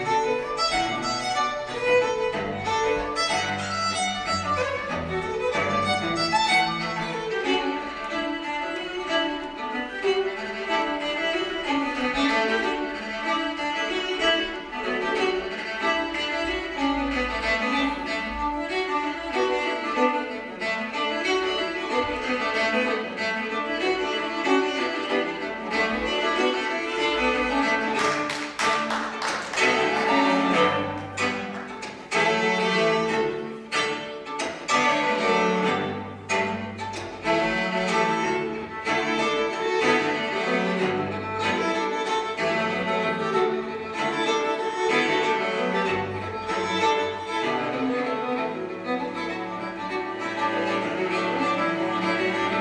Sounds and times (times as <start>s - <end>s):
String section: 0.0s - 52.6s.